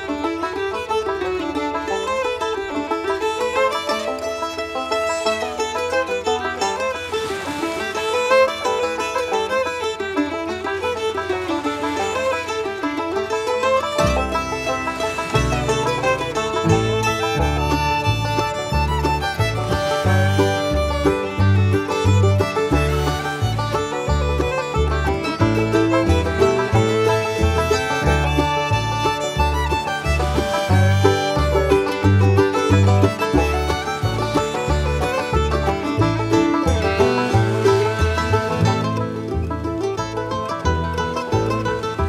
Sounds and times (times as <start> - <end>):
Music: 0.0 - 42.0.